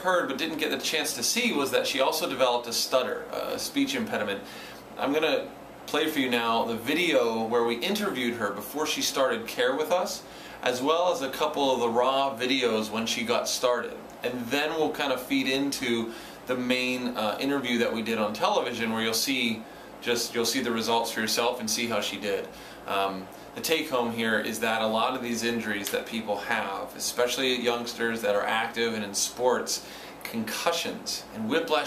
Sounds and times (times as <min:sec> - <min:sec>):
Male speech, man speaking: 0:00.0 - 0:04.4, 0:05.0 - 0:31.8.